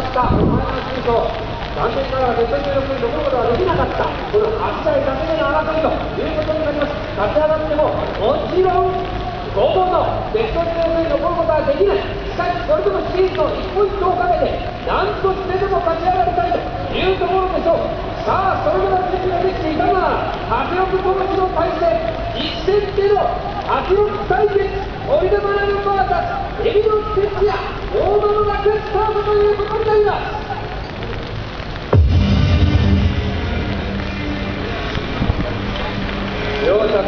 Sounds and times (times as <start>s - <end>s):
Speech: 0.0s - 30.7s, 35.4s - 37.0s.